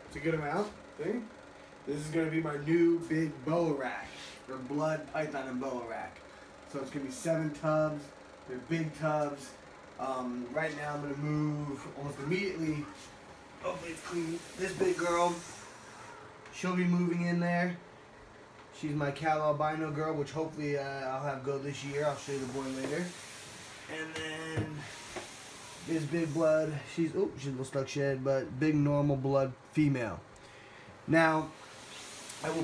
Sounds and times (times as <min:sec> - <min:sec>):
Inside, small room: 0:00.0 - 0:32.6
Speech: 0:00.1 - 0:01.3, 0:01.9 - 0:15.5, 0:16.6 - 0:17.8, 0:18.8 - 0:23.2, 0:23.9 - 0:24.9, 0:25.9 - 0:30.2, 0:31.1 - 0:31.6, 0:32.4 - 0:32.6.